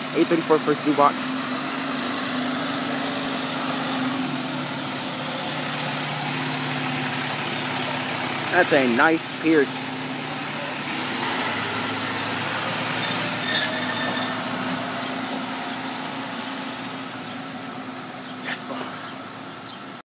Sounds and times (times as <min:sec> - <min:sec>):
Truck: 0:00.0 - 0:20.0.